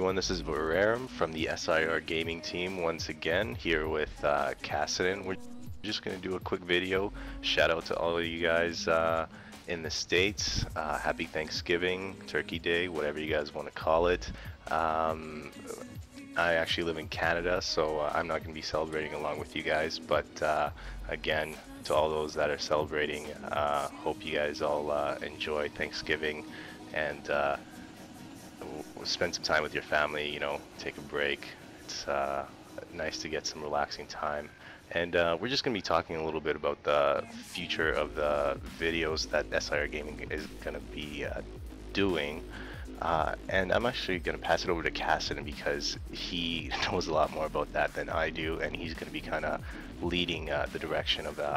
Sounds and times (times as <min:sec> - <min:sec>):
Speech: 0:00.0 - 0:27.6, 0:28.6 - 0:41.4, 0:42.0 - 0:51.5
Music: 0:00.0 - 0:51.5.